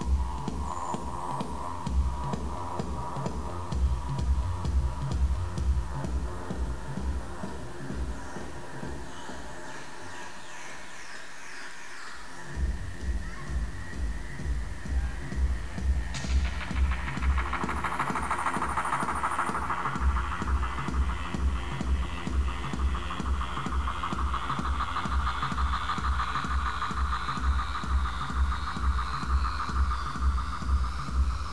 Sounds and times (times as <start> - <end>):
Music: 0.0 - 31.5.